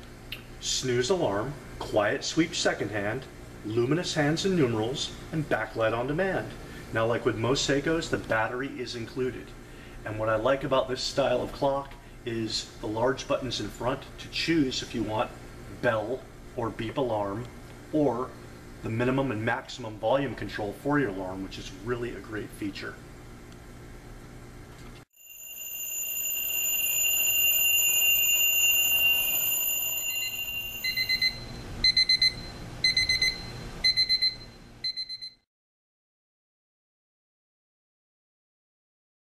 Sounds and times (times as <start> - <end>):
Speech: 0.6 - 23.0.